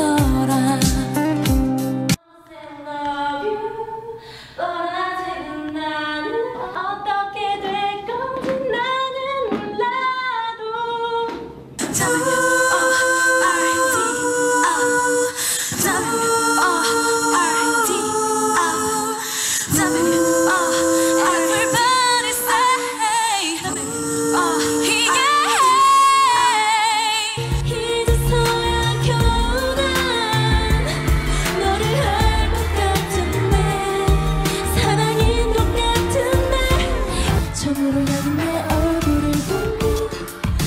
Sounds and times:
Female singing: 0.0 - 1.2, 2.2 - 40.6
Choir: 2.2 - 9.9, 11.8 - 40.6.

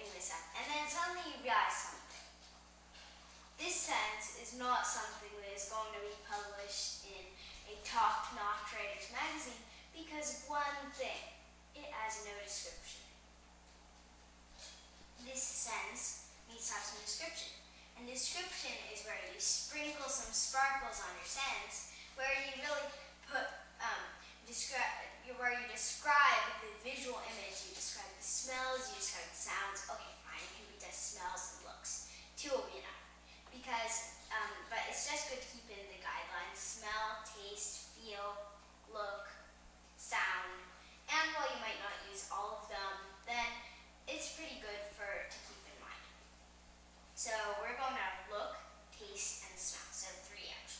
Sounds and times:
Speech: 0.0 - 2.2, 3.6 - 13.1, 15.2 - 46.2, 47.2 - 50.7.

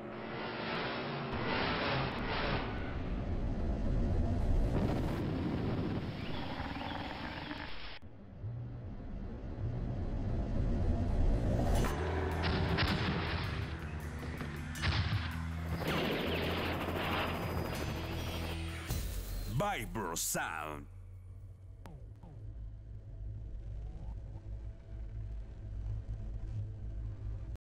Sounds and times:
Music: 8.0 - 27.6
Speech: 19.5 - 20.9.

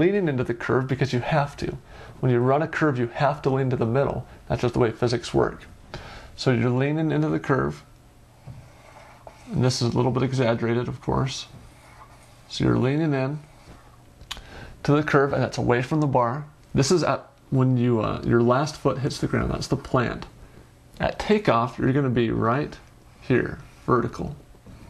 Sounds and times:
Speech: 0.0 - 5.7, 6.4 - 7.9, 9.5 - 11.6, 12.5 - 13.5, 14.8 - 20.3, 21.0 - 24.4
Inside, small room: 0.0 - 24.9.

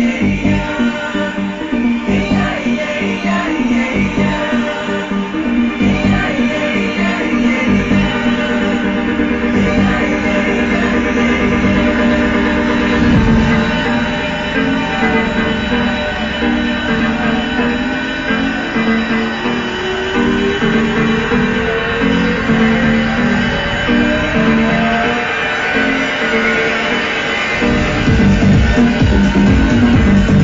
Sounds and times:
Music: 0.0 - 30.4.

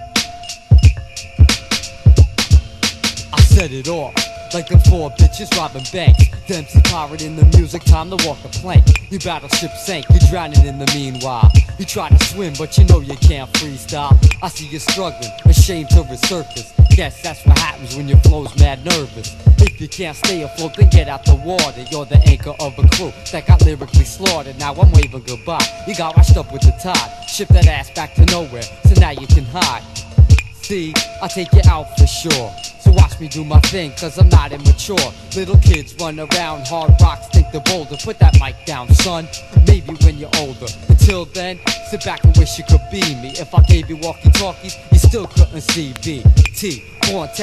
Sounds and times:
Music: 0.0 - 47.4.

